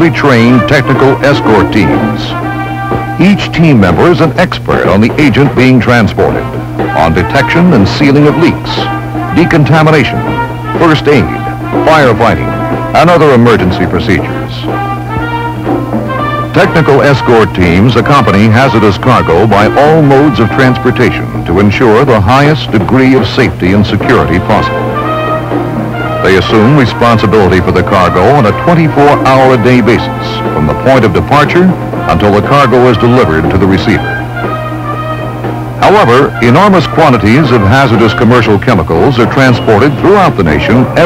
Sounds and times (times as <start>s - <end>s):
Speech: 0.0s - 2.4s, 3.2s - 14.7s, 16.6s - 24.8s, 26.2s - 34.1s, 35.8s - 41.0s
Music: 0.0s - 41.0s.